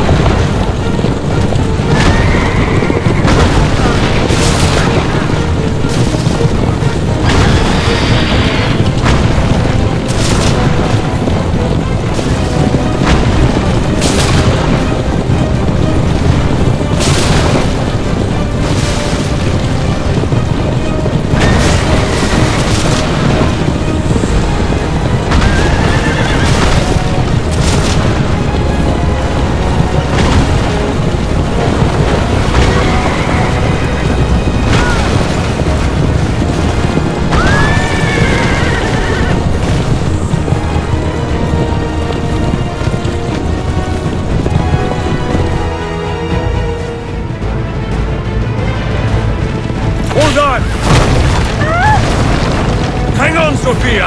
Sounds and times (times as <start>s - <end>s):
Music: 0.0s - 54.0s
Outside, rural or natural: 0.0s - 54.0s.